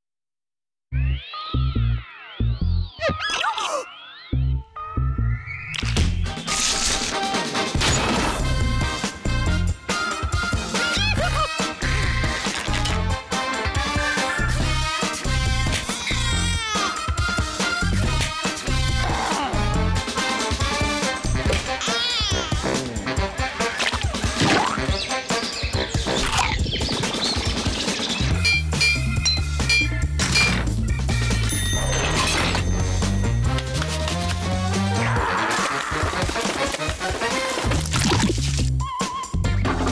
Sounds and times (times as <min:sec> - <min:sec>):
Music: 0:00.9 - 0:03.0, 0:04.0 - 0:39.9.